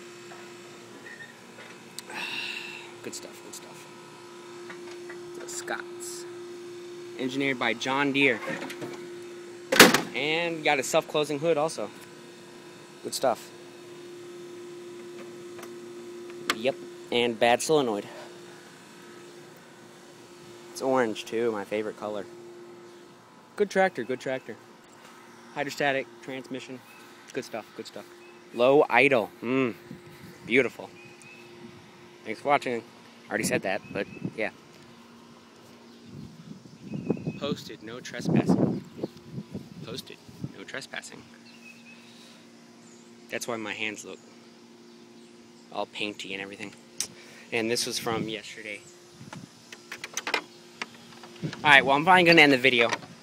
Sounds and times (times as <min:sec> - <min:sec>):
Speech: 0:03.0 - 0:03.8, 0:05.4 - 0:06.3, 0:07.2 - 0:08.4, 0:10.1 - 0:12.0, 0:13.0 - 0:13.5, 0:16.5 - 0:18.2, 0:20.8 - 0:22.3, 0:23.6 - 0:24.6, 0:25.6 - 0:29.8, 0:30.5 - 0:30.9, 0:32.2 - 0:34.6, 0:37.4 - 0:38.6, 0:39.8 - 0:41.3, 0:43.3 - 0:44.2, 0:45.7 - 0:46.8, 0:47.5 - 0:48.8, 0:51.6 - 0:53.0.